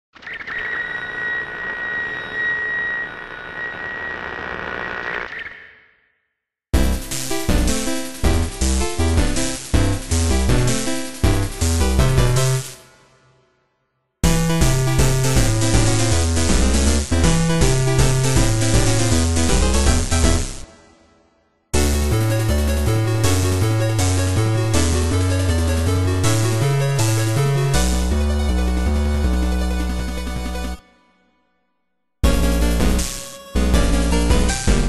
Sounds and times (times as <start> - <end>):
Music: 6.7 - 34.8.